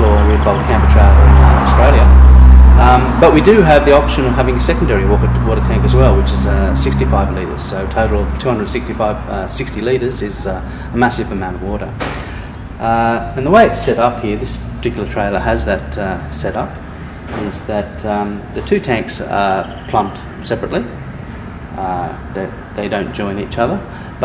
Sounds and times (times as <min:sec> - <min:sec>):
Speech: 0:00.0 - 0:02.2, 0:02.8 - 0:12.0, 0:12.8 - 0:21.0, 0:21.8 - 0:24.2.